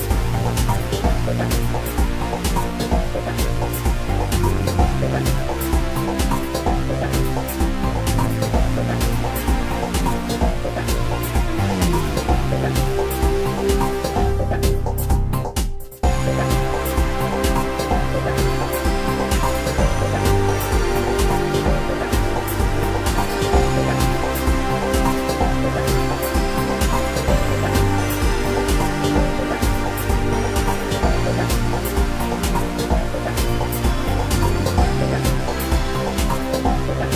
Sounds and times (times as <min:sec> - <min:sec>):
Music: 0:00.0 - 0:37.1.